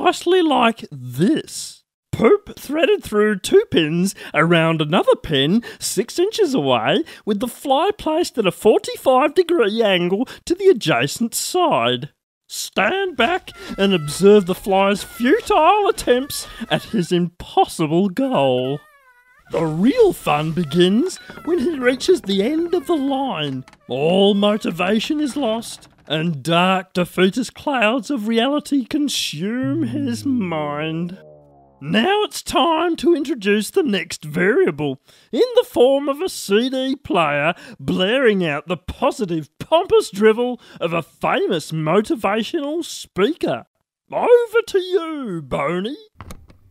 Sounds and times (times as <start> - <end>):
Speech: 0.0 - 18.8, 19.5 - 31.2, 31.8 - 46.1.